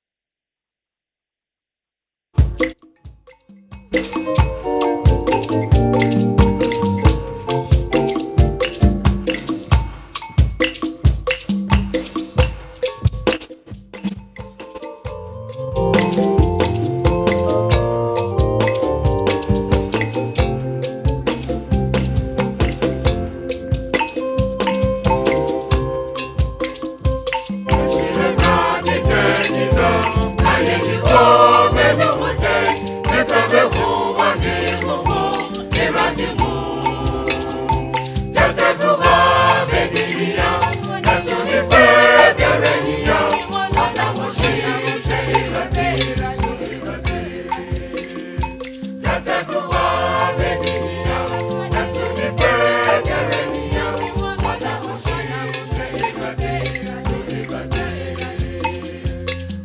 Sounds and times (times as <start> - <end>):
Choir: 27.8 - 59.6.